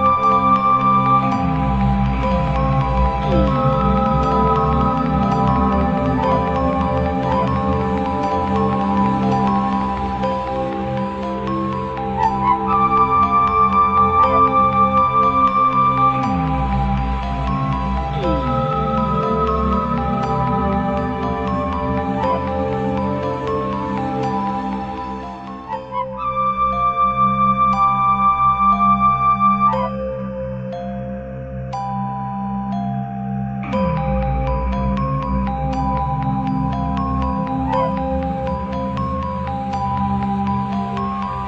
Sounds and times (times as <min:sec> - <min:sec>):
Music: 0:00.0 - 0:41.4.